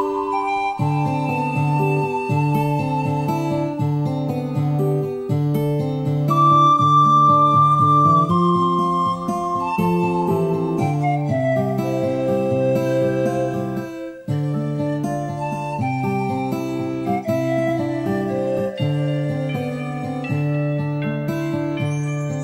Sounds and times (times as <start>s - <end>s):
Flute: 0.0s - 22.4s.